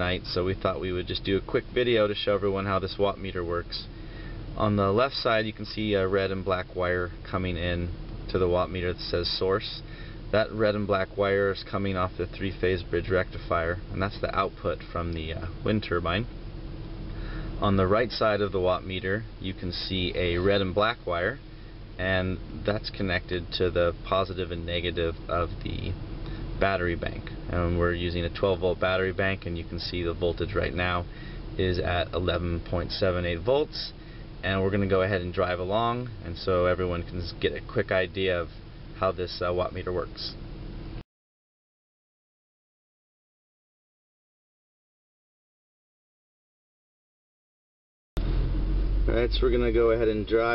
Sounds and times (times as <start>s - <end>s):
Speech: 0.0s - 3.9s, 4.6s - 16.3s, 17.6s - 21.4s, 22.0s - 26.0s, 26.6s - 40.4s, 49.1s - 50.5s.